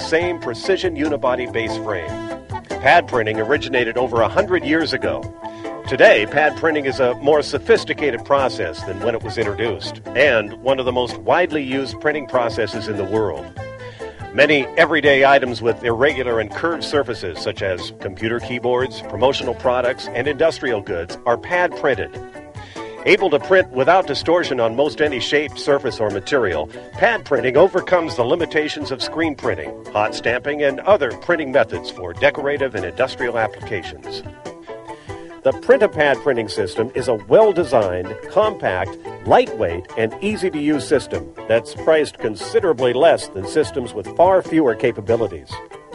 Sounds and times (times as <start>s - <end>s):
Speech: 0.0s - 2.2s, 2.8s - 5.3s, 5.9s - 13.5s, 14.4s - 22.2s, 23.0s - 34.3s, 35.4s - 45.6s
Music: 0.0s - 45.9s.